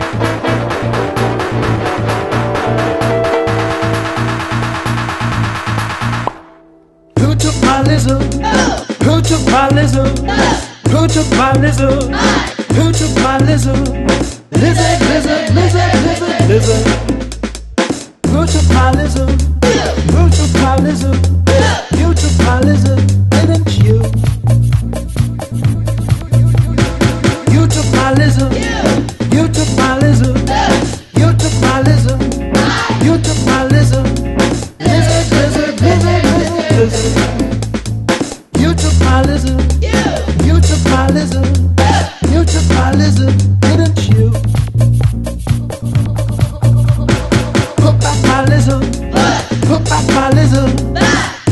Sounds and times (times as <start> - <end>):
Funny music: 0.0 - 51.5.